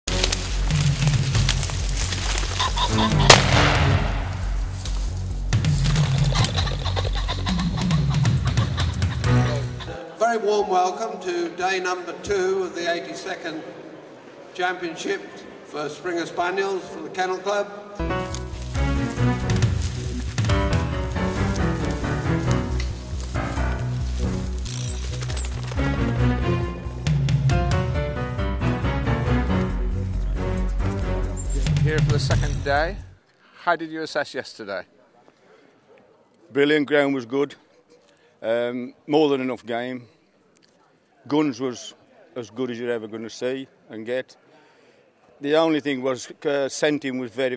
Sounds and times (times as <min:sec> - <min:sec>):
Music: 0:00.0 - 0:10.0, 0:18.0 - 0:33.2.